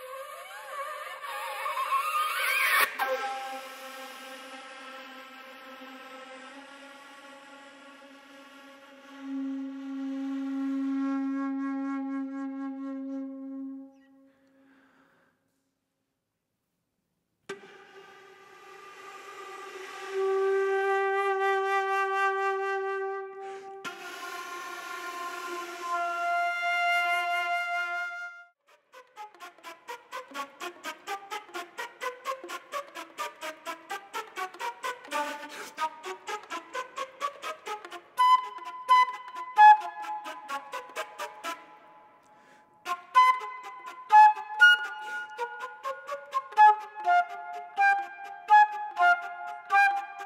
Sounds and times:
Flute: 0:00.0 - 0:15.0, 0:17.5 - 0:50.2.

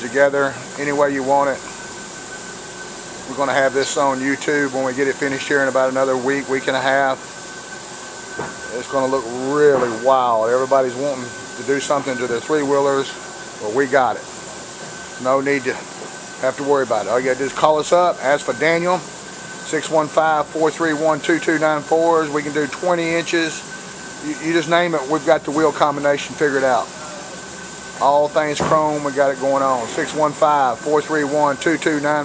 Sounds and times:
Speech: 0:00.0 - 0:01.7, 0:03.3 - 0:07.2, 0:08.7 - 0:14.3, 0:15.2 - 0:19.1, 0:19.7 - 0:23.6, 0:24.2 - 0:27.4, 0:28.0 - 0:32.2.

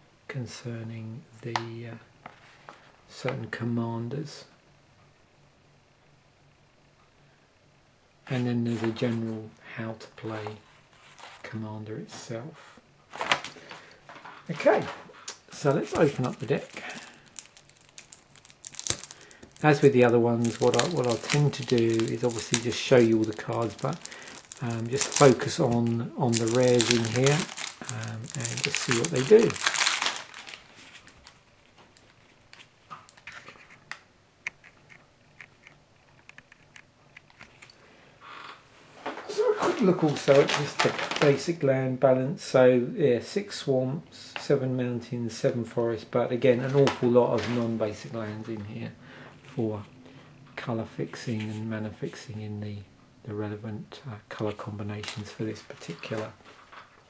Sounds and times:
Inside, small room: 0:00.0 - 0:57.1
Speech: 0:00.3 - 0:02.1, 0:03.1 - 0:04.6, 0:08.3 - 0:10.6, 0:11.4 - 0:12.7, 0:14.5 - 0:17.1, 0:19.6 - 0:29.7, 0:39.2 - 0:49.9, 0:50.6 - 0:56.4.

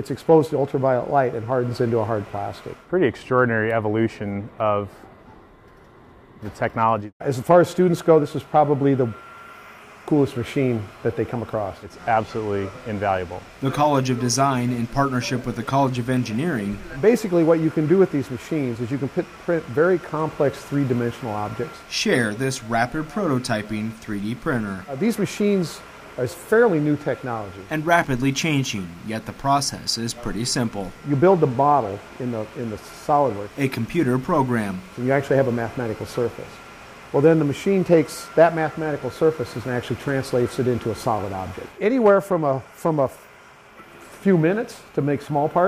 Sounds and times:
Speech: 0:00.0 - 0:05.0, 0:06.4 - 0:09.2, 0:10.1 - 0:36.6, 0:37.2 - 0:43.2, 0:44.2 - 0:45.6.

